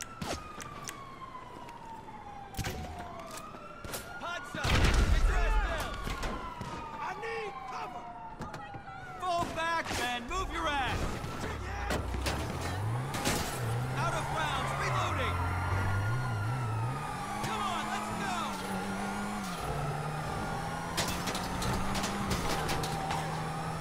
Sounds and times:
Police car (siren): 0:00.0 - 0:23.8
Speech: 0:07.0 - 0:08.0, 0:09.2 - 0:12.0, 0:14.0 - 0:15.4, 0:17.4 - 0:18.6
Car: 0:08.3 - 0:23.8.

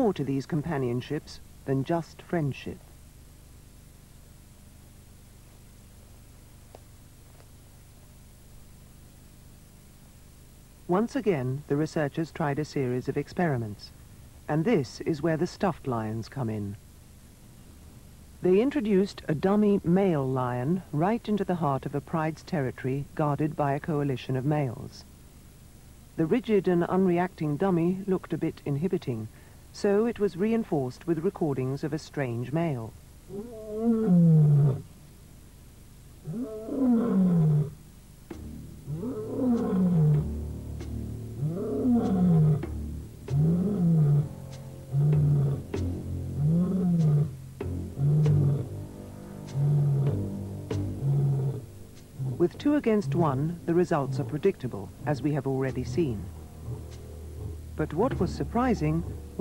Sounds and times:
Music: 0:38.3 - 0:59.4.

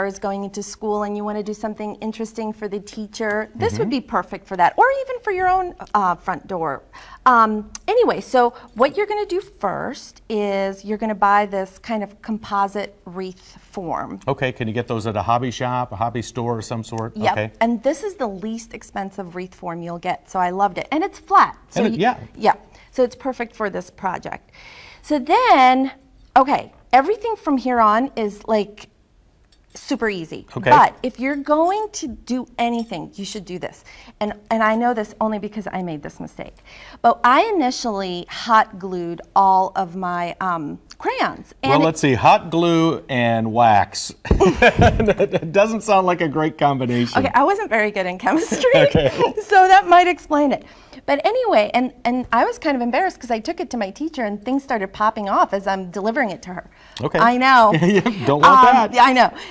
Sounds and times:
Speech: 0:03.3 - 0:04.2, 0:14.3 - 0:17.5, 0:21.7 - 0:22.6, 0:30.5 - 0:31.0, 0:41.1 - 0:47.6, 0:48.3 - 0:49.9, 0:57.0 - 0:59.3.

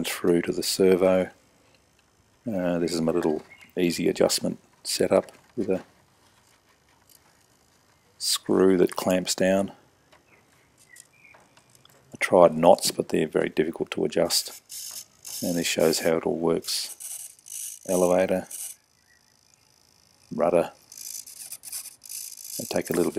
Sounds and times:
Speech: 0:00.0 - 0:01.4, 0:02.5 - 0:05.9, 0:08.2 - 0:09.8, 0:12.2 - 0:14.6, 0:15.4 - 0:16.9, 0:17.9 - 0:18.5, 0:20.4 - 0:20.8, 0:22.6 - 0:23.1.

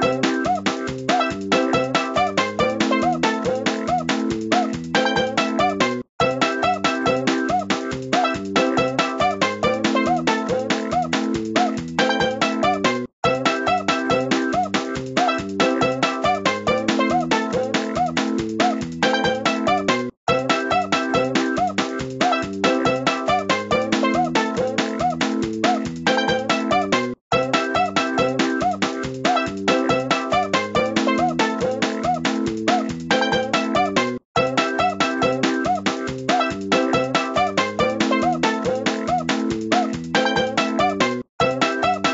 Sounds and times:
Music: 0:00.0 - 0:42.1.

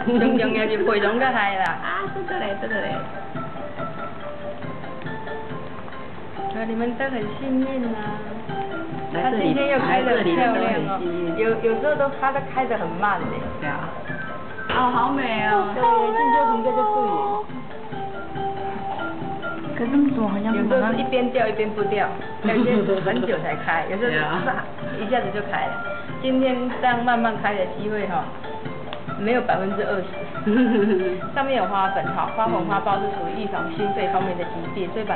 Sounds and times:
Music: 0:00.0 - 0:35.1.

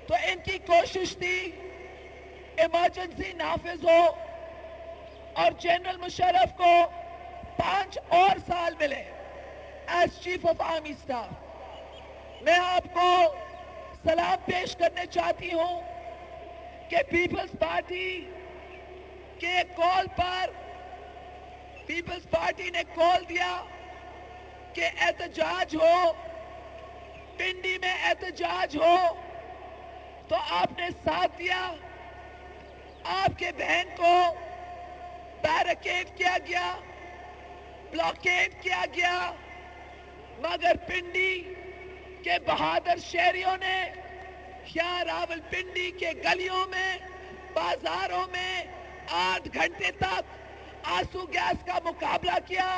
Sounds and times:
Narration, monologue: 0:00.0 - 0:52.7.

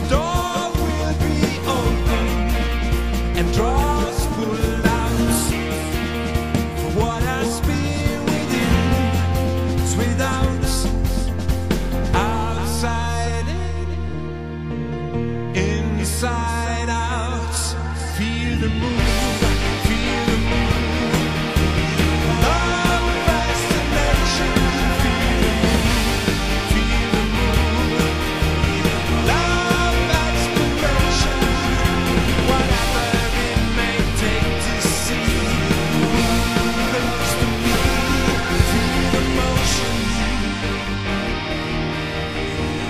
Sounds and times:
Independent music: 0:00.0 - 0:42.8.

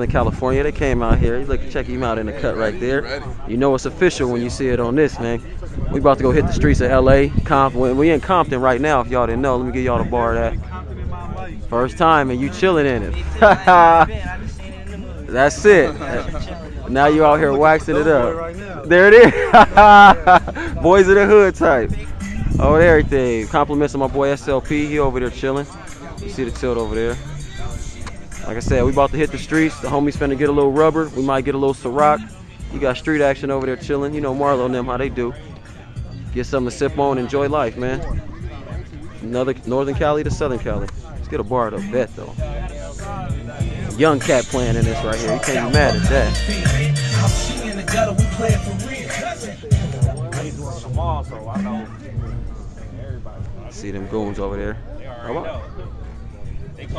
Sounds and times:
Speech: 0:00.0 - 0:19.4, 0:20.0 - 0:27.2, 0:28.4 - 0:35.6, 0:36.3 - 0:46.4, 0:50.4 - 0:56.9
Music: 0:00.0 - 0:56.9.

